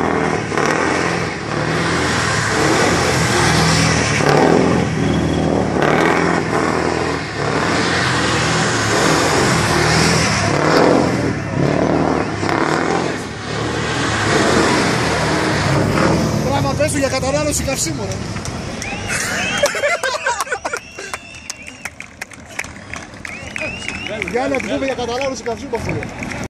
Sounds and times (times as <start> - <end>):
Vehicle: 0.0 - 26.5
Speech: 23.6 - 26.1.